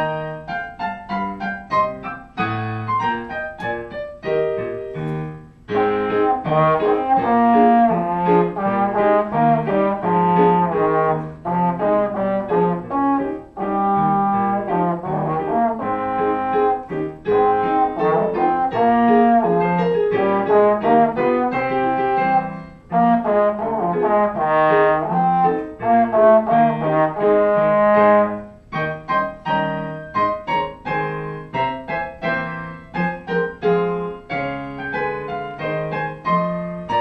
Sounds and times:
Trombone: 0:05.2 - 0:37.0.

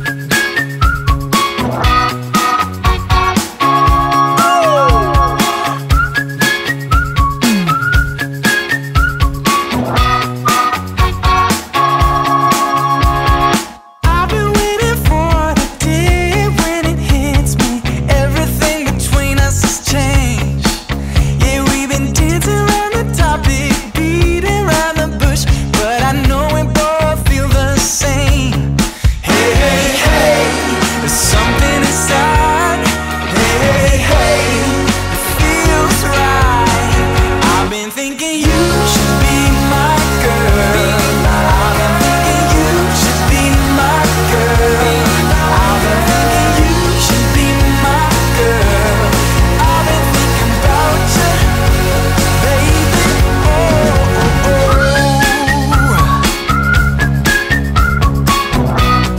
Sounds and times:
Music: 0:00.0 - 0:59.1.

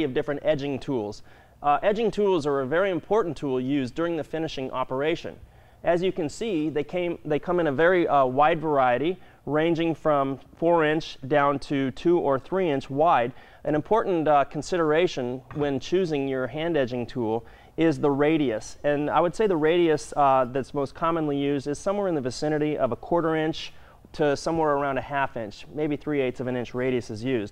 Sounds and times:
Speech: 0:00.0 - 0:27.5.

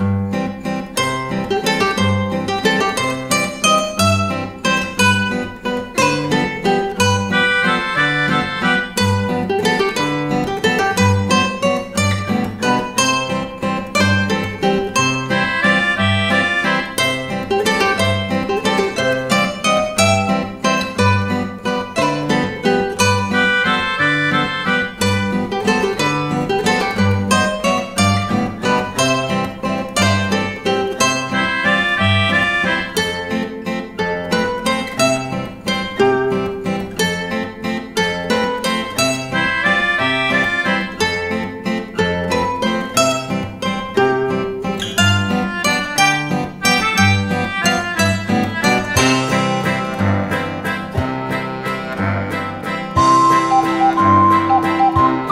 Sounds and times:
Music: 0:00.0 - 0:55.3.

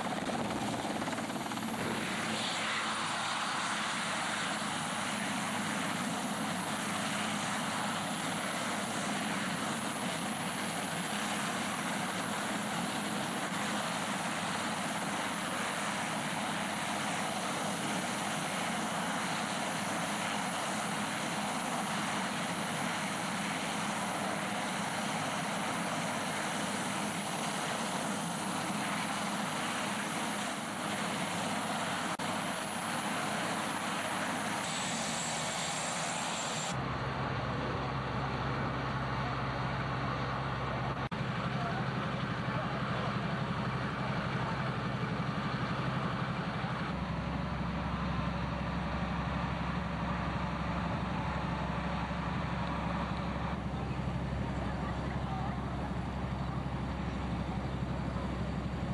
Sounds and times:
Helicopter: 0:00.0 - 0:58.9.

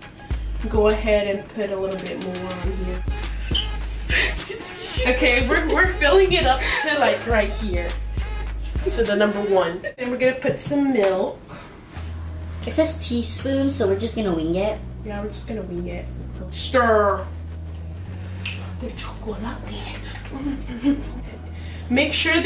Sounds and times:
Music: 0:00.0 - 0:10.0, 0:11.9 - 0:22.4
Speech: 0:00.6 - 0:03.1, 0:05.0 - 0:08.0, 0:08.8 - 0:11.4, 0:12.6 - 0:17.4, 0:18.8 - 0:20.1, 0:21.9 - 0:22.4.

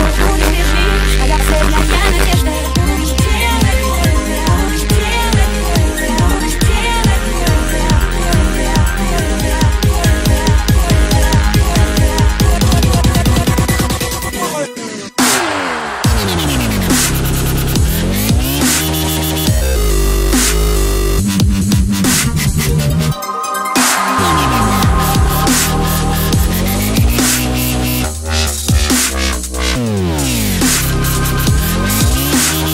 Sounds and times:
Dubstep: 0:00.0 - 0:32.7.

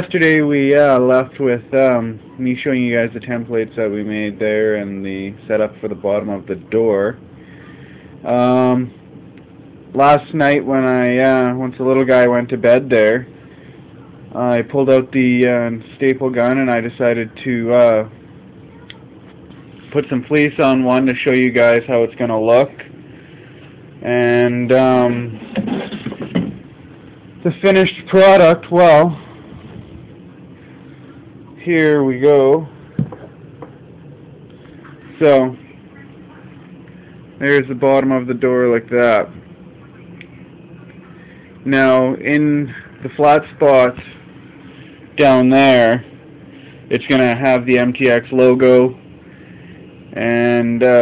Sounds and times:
Speech: 0:00.0 - 0:07.2, 0:08.2 - 0:08.9, 0:09.9 - 0:13.3, 0:14.1 - 0:18.1, 0:18.7 - 0:22.9, 0:24.0 - 0:25.4, 0:27.4 - 0:29.2, 0:34.8 - 0:36.8, 0:37.4 - 0:44.2, 0:45.2 - 0:46.1, 0:46.9 - 0:49.0, 0:50.2 - 0:51.0.

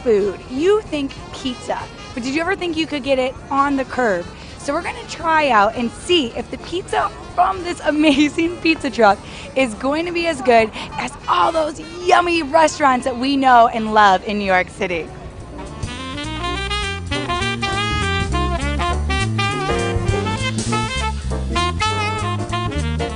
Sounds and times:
Speech: 0:00.0 - 0:15.2
Music: 0:00.0 - 0:23.1.

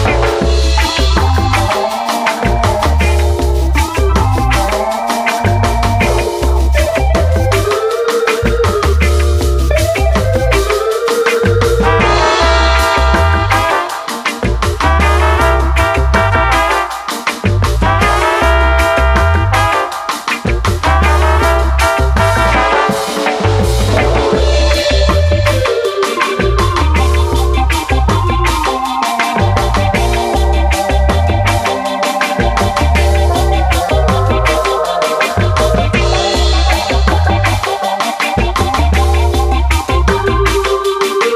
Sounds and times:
Music: 0:00.0 - 0:41.3.

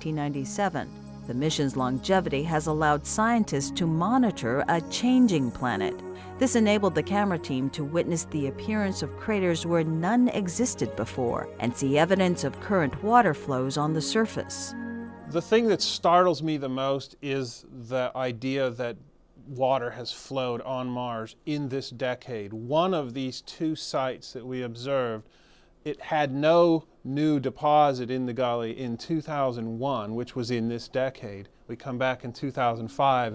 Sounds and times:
Speech: 0:00.0 - 0:14.7, 0:15.3 - 0:25.2, 0:25.9 - 0:33.3
Music: 0:00.0 - 0:16.7, 0:32.5 - 0:33.3.

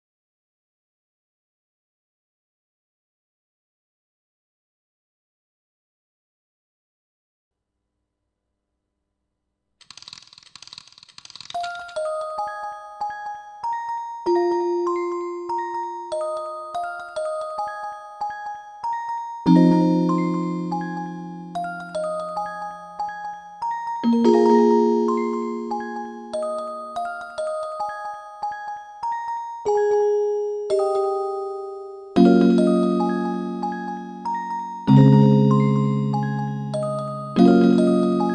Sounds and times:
Piano: 0:11.5 - 0:38.3.

